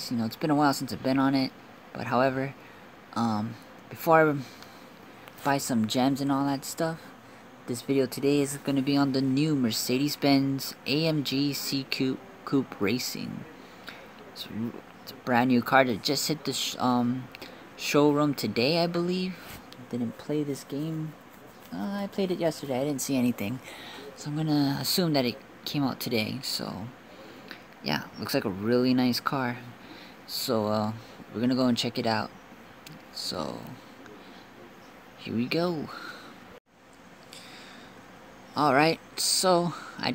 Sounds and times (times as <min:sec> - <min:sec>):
Speech: 0:00.0 - 0:04.6, 0:05.4 - 0:36.2, 0:38.5 - 0:40.1.